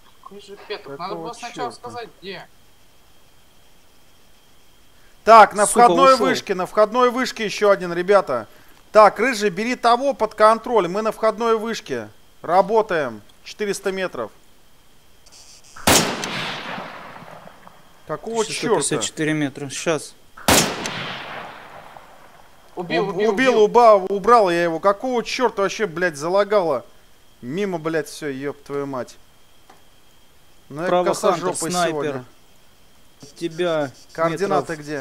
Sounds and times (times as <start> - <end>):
Speech: 5.3 - 14.4, 18.1 - 20.2, 22.8 - 29.2, 30.7 - 32.3, 33.2 - 35.0.